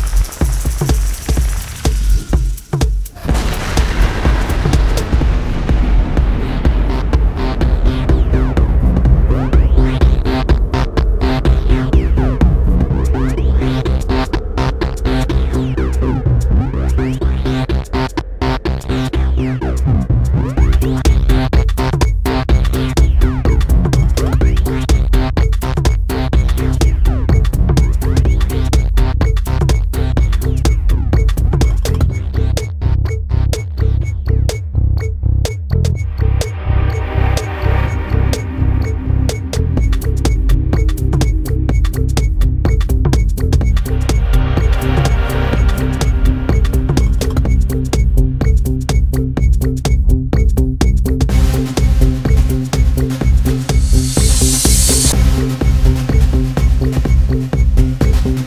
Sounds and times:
Music: 0.0 - 58.4.

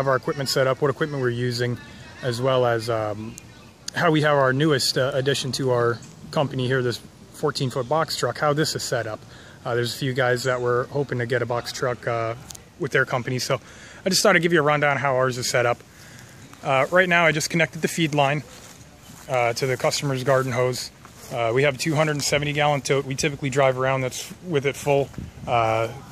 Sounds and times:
Speech: 0.0 - 15.8, 16.5 - 26.1.

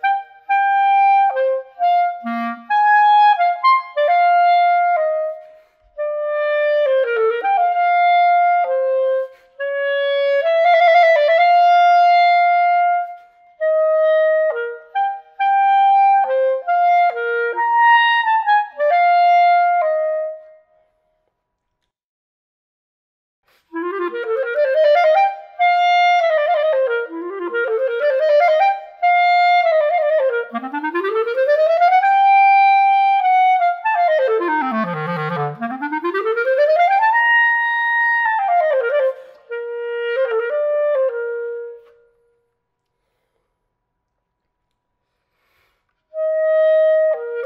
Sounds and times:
Clarinet: 0.0 - 21.0, 23.5 - 43.4, 45.4 - 47.4.

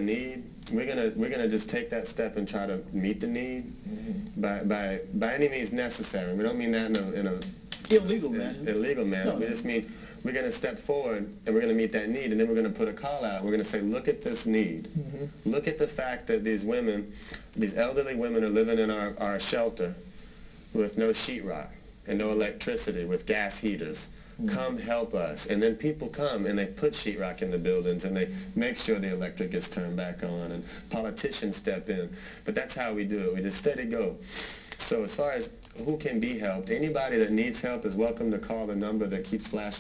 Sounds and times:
Speech: 0.0 - 20.0, 20.8 - 34.2, 34.8 - 39.8.

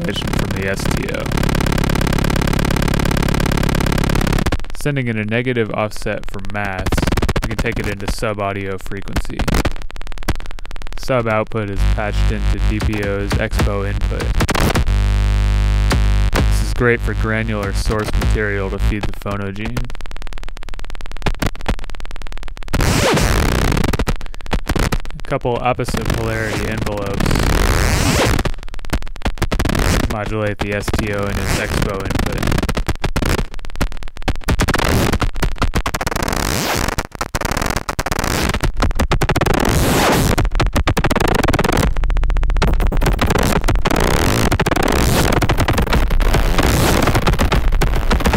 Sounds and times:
Speech: 0.0 - 1.3, 4.8 - 9.6, 11.0 - 14.3, 16.5 - 19.9, 25.1 - 27.5, 30.1 - 32.5
Cacophony: 0.0 - 48.3.

